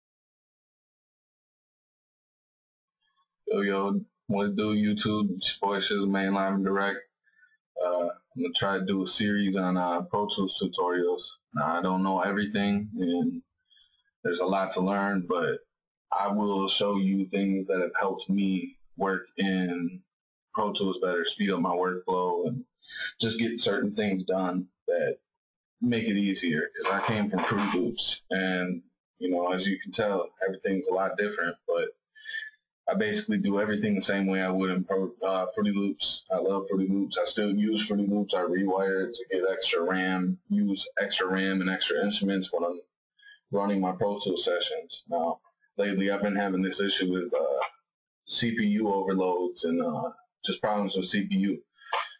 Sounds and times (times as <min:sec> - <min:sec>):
Speech: 0:03.5 - 0:07.0, 0:07.8 - 0:13.4, 0:14.3 - 0:20.0, 0:20.6 - 0:25.2, 0:25.8 - 0:42.8, 0:43.5 - 0:47.7, 0:48.3 - 0:52.1.